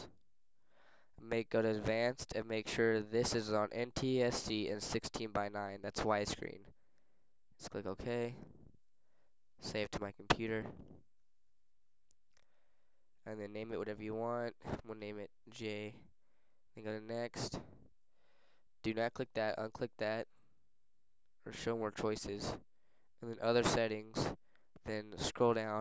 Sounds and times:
Inside, small room: 0:00.0 - 0:25.8
Speech: 0:01.2 - 0:06.7, 0:07.6 - 0:08.5, 0:09.6 - 0:10.8, 0:13.2 - 0:16.1, 0:16.8 - 0:17.7, 0:18.8 - 0:20.3, 0:21.4 - 0:22.6, 0:23.2 - 0:25.8.

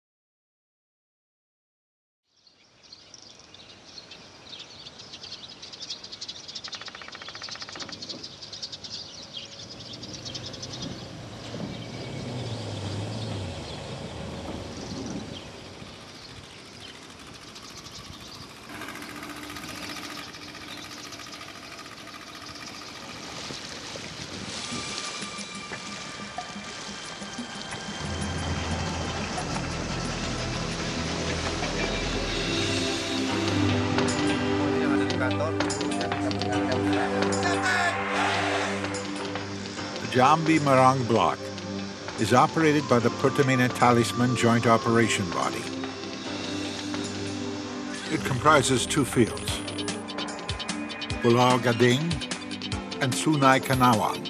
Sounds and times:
Outside, rural or natural: 0:02.2 - 0:54.2
Chirp, tweet: 0:02.3 - 0:17.0
Environmental noise: 0:02.3 - 0:54.2.

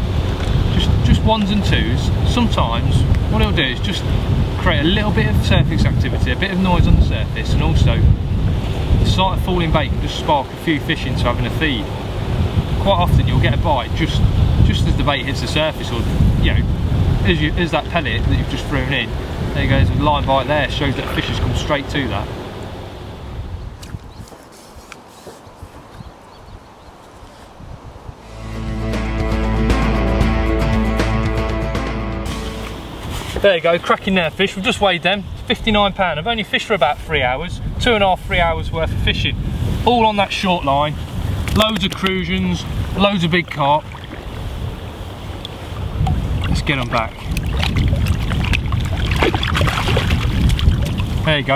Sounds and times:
Outside, rural or natural: 0:00.0 - 0:51.5
Music: 0:28.3 - 0:33.1.

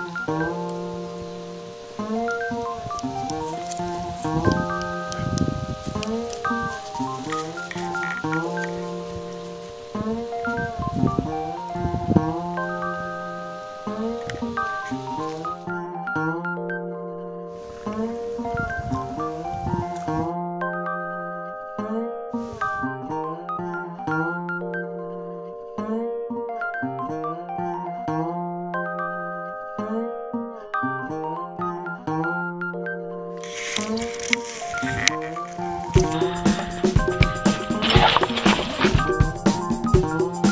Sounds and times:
Music: 0:00.0 - 0:40.5.

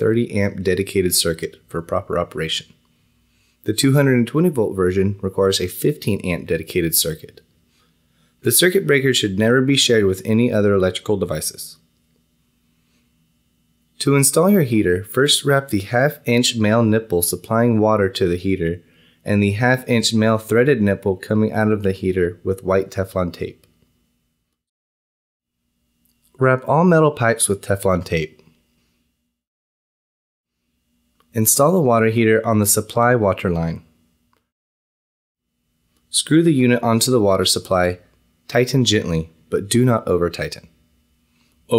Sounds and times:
Speech: 0:00.0 - 0:02.8, 0:03.6 - 0:07.5, 0:08.4 - 0:11.8, 0:14.0 - 0:23.7, 0:26.3 - 0:28.5, 0:31.3 - 0:33.9, 0:36.1 - 0:40.8.

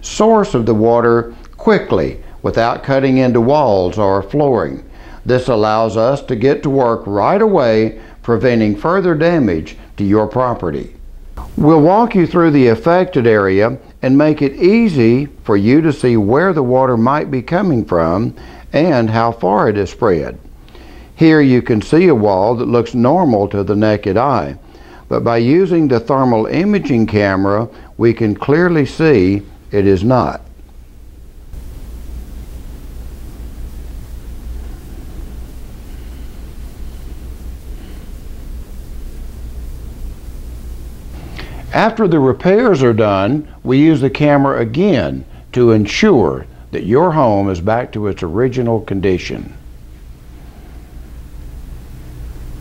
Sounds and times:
Speech: 0:00.0 - 0:20.4, 0:21.2 - 0:30.5, 0:41.7 - 0:49.6.

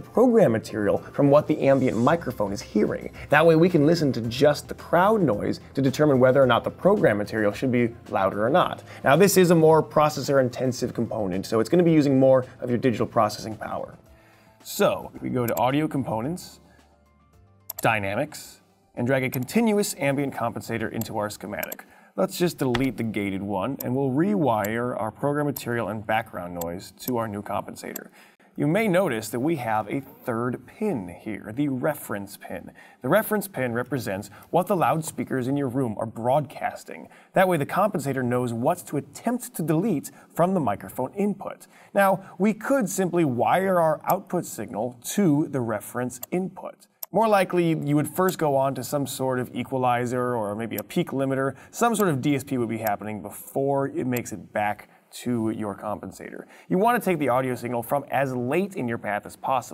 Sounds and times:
Speech: 0:00.0 - 0:14.0, 0:14.6 - 0:16.6, 0:17.8 - 0:59.7
Music: 0:00.0 - 0:32.6.

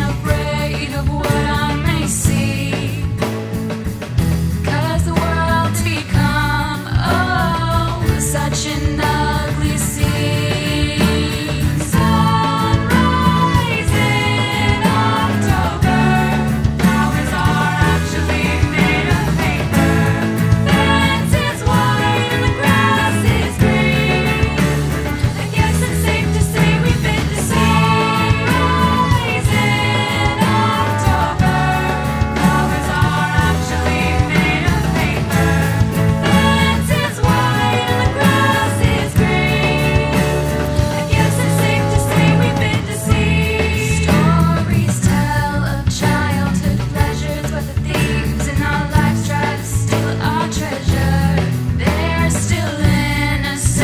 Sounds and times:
Jingle (music): 0:00.0 - 0:53.8.

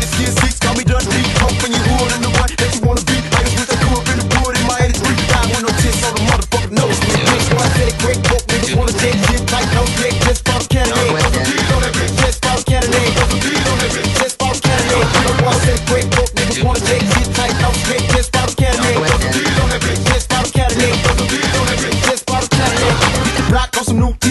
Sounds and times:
Afrobeat: 0:00.0 - 0:24.3.

